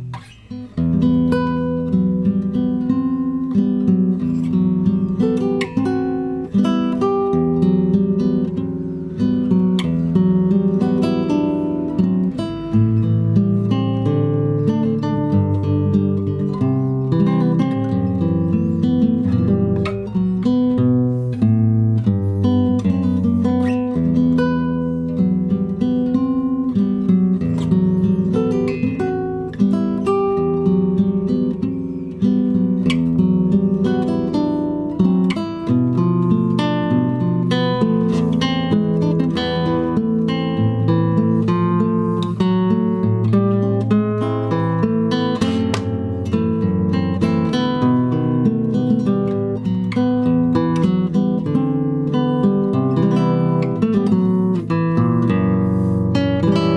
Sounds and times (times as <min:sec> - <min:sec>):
Acoustic guitar: 0:00.0 - 0:56.7.